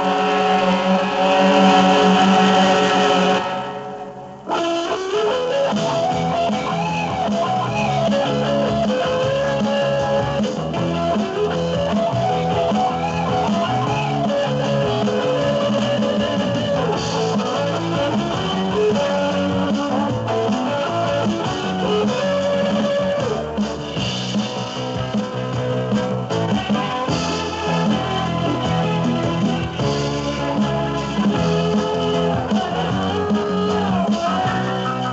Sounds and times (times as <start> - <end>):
Music: 0.0 - 35.1.